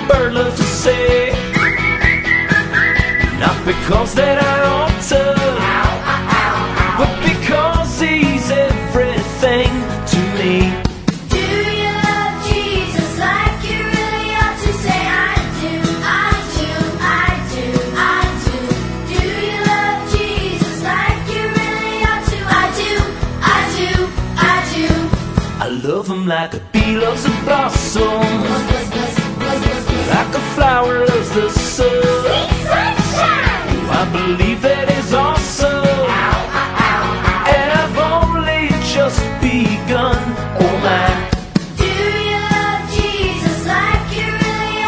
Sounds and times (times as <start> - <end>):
Music for children: 0.0 - 25.6, 26.8 - 44.8.